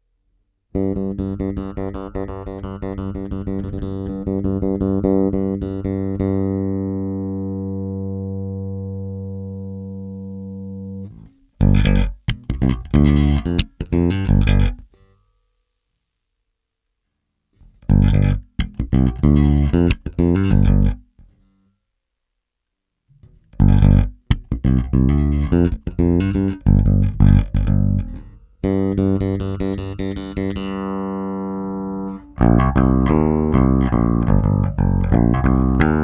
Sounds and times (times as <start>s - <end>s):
Inside, small room: 0.0s - 36.0s
Music: 0.7s - 15.4s, 17.6s - 21.7s, 23.1s - 36.0s
Electronic tuner: 0.7s - 15.5s, 17.5s - 21.9s, 23.0s - 36.0s.